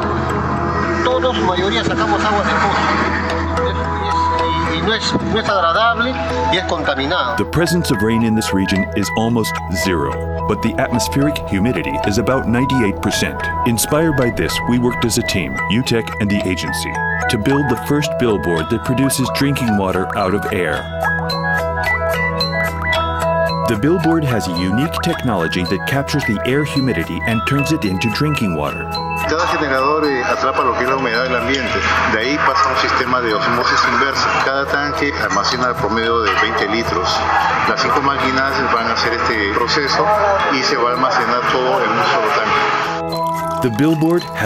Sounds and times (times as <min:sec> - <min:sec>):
Music: 0:00.0 - 0:44.4
Speech: 0:04.5 - 0:20.9, 0:23.7 - 0:42.7, 0:43.6 - 0:44.4.